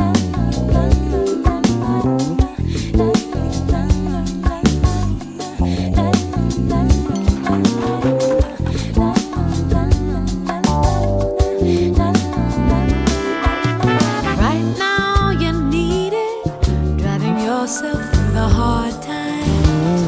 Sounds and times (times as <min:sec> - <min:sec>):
Music: 0:00.0 - 0:20.0.